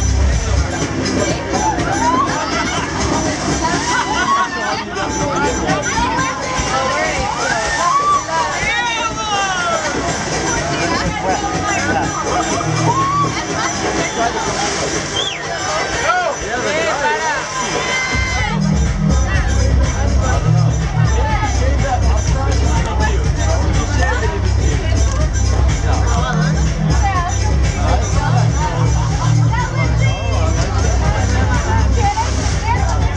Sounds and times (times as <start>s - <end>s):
Music: 0.0s - 33.1s
Speech: 0.0s - 33.1s.